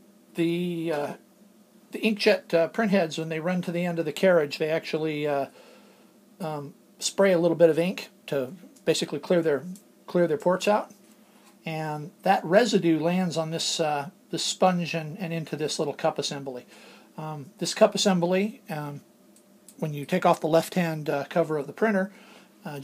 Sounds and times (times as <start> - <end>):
Speech: 0.4 - 1.2, 1.9 - 5.6, 6.4 - 11.0, 11.6 - 19.0, 19.8 - 22.8.